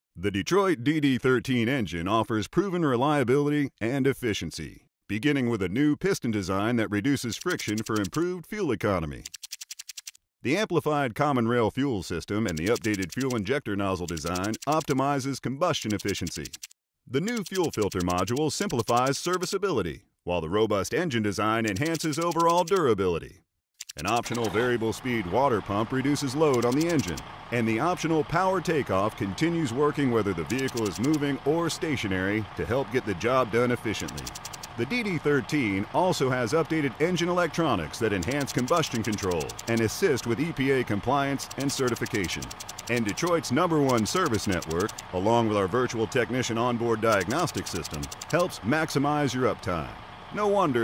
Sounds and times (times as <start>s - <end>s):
Speech: 0.2s - 9.3s, 10.5s - 23.4s, 24.0s - 50.8s
Idling: 24.1s - 50.8s.